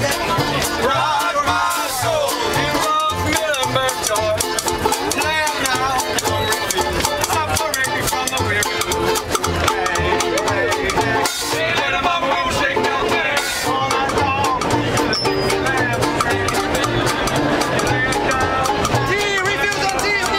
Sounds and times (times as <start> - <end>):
Music: 0.0 - 20.3.